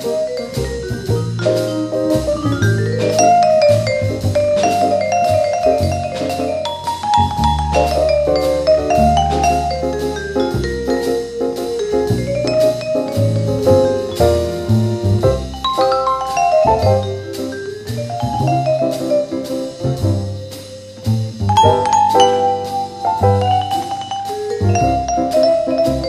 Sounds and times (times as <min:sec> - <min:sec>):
Glockenspiel: 0:00.0 - 0:20.6, 0:21.5 - 0:26.0
Marimba, xylophone: 0:00.0 - 0:20.6, 0:21.5 - 0:26.0.